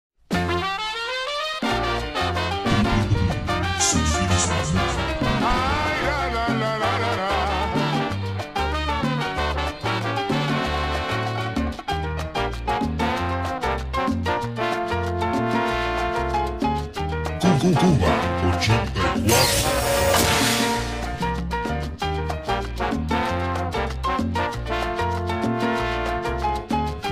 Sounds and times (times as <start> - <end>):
Salsa music: 0.3 - 27.1.